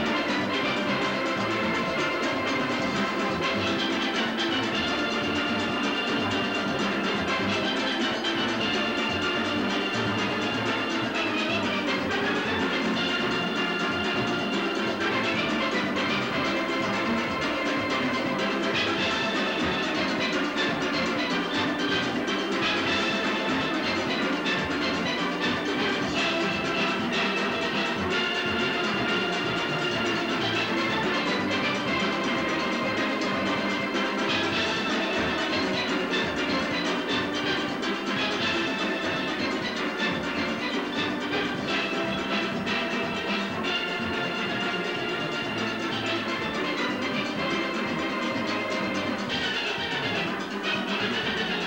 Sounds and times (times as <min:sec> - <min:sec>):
Steelpan: 0:00.0 - 0:51.6.